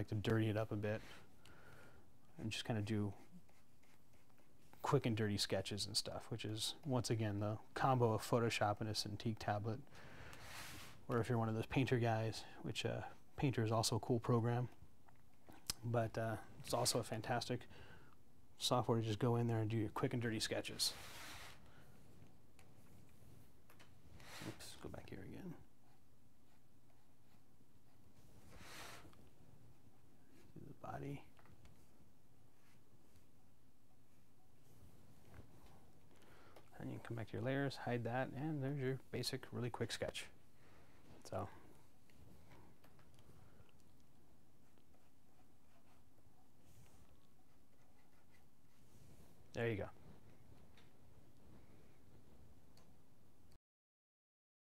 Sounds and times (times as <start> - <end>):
Speech: 0.0 - 1.1, 2.4 - 3.3, 4.8 - 9.8, 11.1 - 14.8, 15.7 - 17.7, 18.6 - 21.0, 24.5 - 25.7, 30.6 - 31.3, 36.7 - 40.4, 41.2 - 41.6, 49.5 - 50.0.